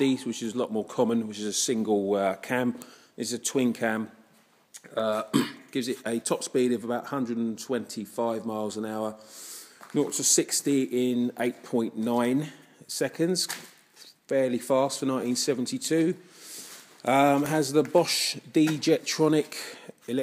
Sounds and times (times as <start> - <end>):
Speech: 0.0 - 4.2, 4.8 - 9.2, 9.9 - 16.2, 17.0 - 20.2.